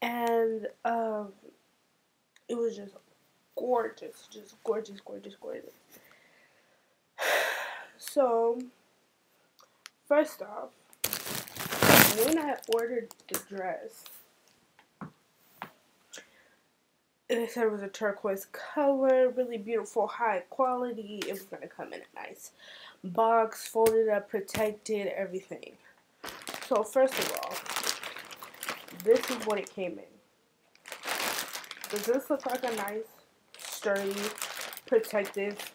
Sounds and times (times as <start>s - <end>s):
Speech: 0.0s - 1.5s, 2.5s - 3.0s, 3.6s - 5.8s, 8.0s - 8.8s, 10.1s - 10.8s, 12.1s - 14.2s, 17.3s - 25.8s, 26.6s - 27.7s, 28.9s - 30.2s, 31.9s - 35.7s.